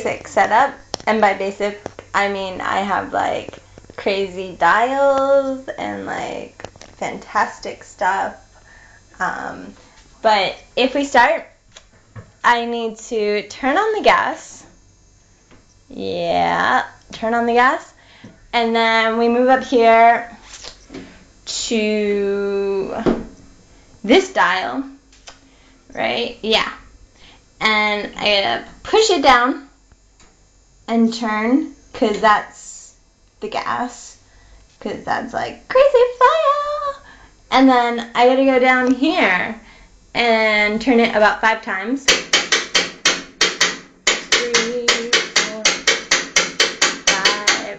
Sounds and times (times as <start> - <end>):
Speech: 0.0 - 8.4, 9.2 - 11.5, 15.9 - 18.0, 18.6 - 20.3, 24.1 - 25.0, 25.9 - 26.8, 30.9 - 34.2, 34.8 - 39.6, 44.3 - 45.8, 47.1 - 47.7.